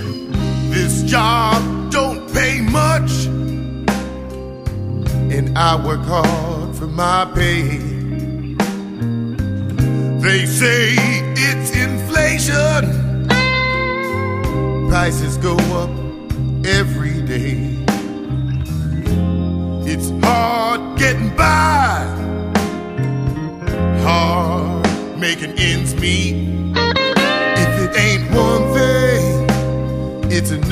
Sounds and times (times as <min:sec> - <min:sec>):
Music: 0:00.0 - 0:30.7.